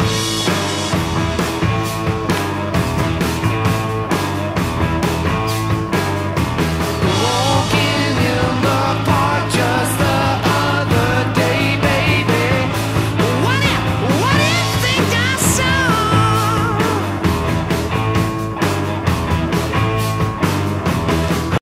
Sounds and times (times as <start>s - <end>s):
Music: 0.0s - 21.6s.